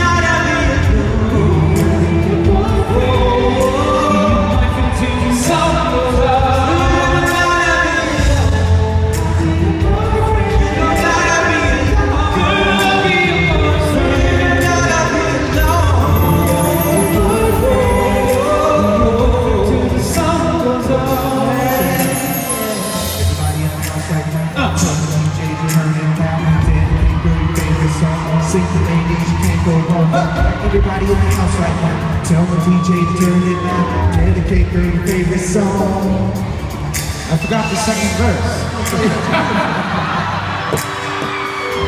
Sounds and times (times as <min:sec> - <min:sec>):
Male singing: 0:00.0 - 0:36.6
Music: 0:00.0 - 0:41.8.